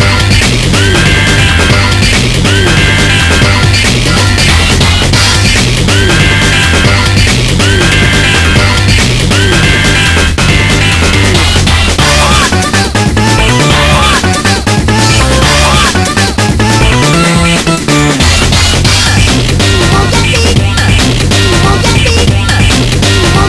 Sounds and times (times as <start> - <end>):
Music: 0.0 - 23.4.